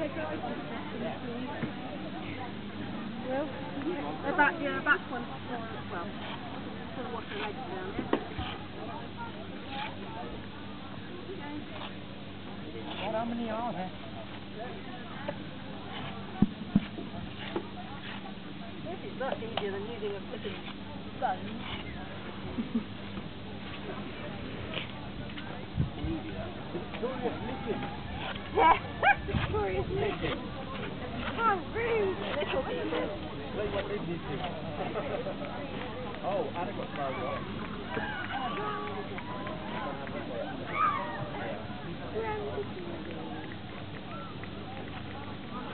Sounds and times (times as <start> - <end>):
Speech: 0.0 - 22.5, 23.5 - 45.7.